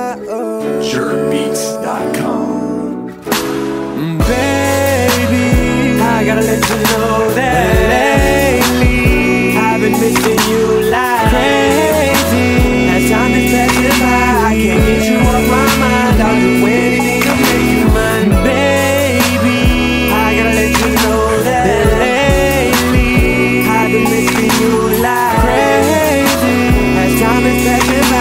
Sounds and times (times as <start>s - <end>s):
Music: 0.0s - 28.2s.